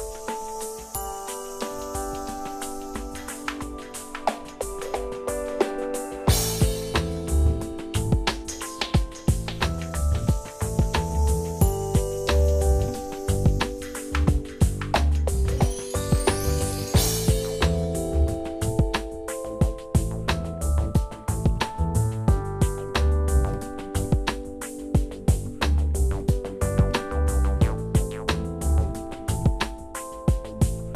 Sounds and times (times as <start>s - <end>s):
Music: 0.0s - 30.9s.